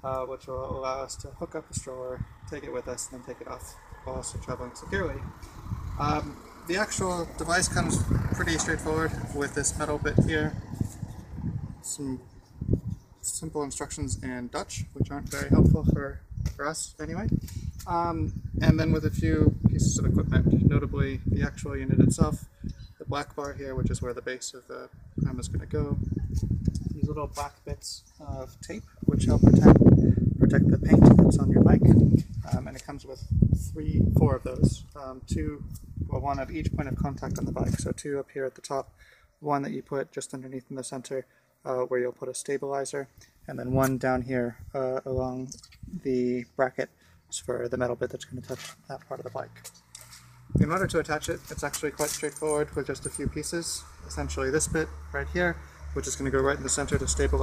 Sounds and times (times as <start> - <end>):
Speech: 0.0 - 5.3, 6.0 - 10.7, 11.8 - 12.3, 13.2 - 22.4, 23.0 - 26.0, 26.8 - 29.8, 30.4 - 49.6, 50.6 - 57.4.